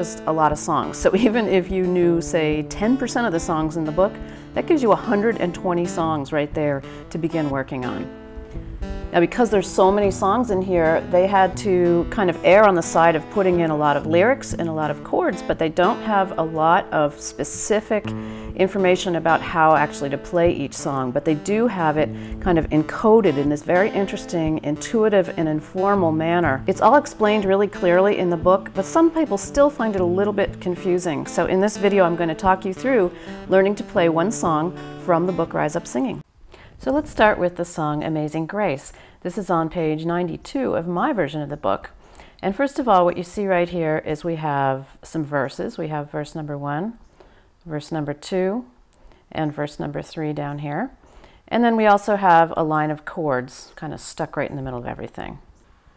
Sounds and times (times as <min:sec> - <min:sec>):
Speech: 0:00.0 - 0:08.1, 0:09.1 - 0:47.0, 0:47.7 - 0:55.5
Acoustic guitar: 0:00.0 - 0:37.5.